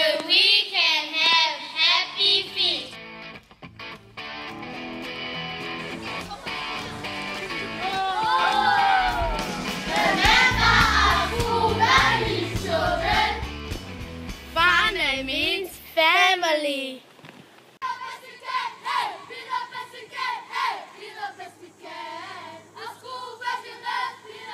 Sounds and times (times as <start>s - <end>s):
Music: 1.9s - 15.9s.